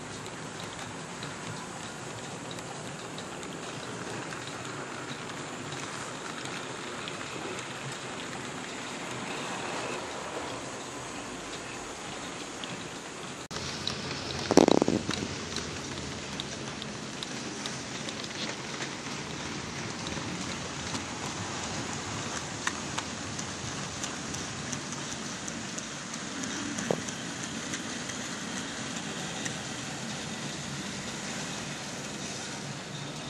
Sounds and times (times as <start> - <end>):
Train: 0.0 - 33.3.